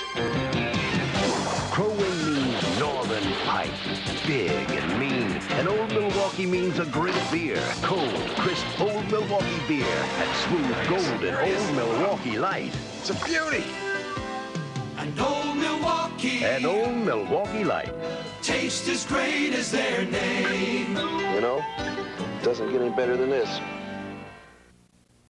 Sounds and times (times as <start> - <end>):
Music: 0.0 - 24.8
Speech: 1.8 - 13.7, 16.4 - 17.9, 22.4 - 23.6.